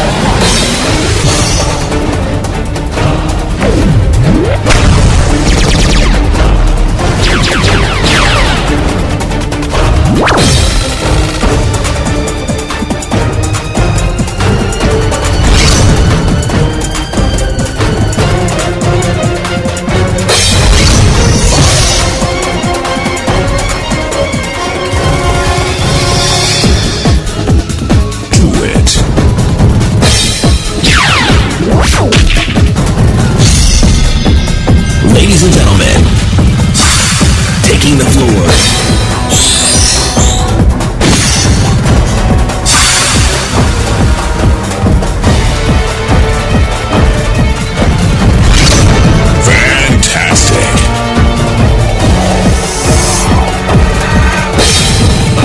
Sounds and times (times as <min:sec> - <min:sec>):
Music: 0:00.0 - 0:55.4
Speech: 0:28.3 - 0:29.0, 0:35.0 - 0:36.1, 0:37.6 - 0:38.6, 0:49.4 - 0:50.9.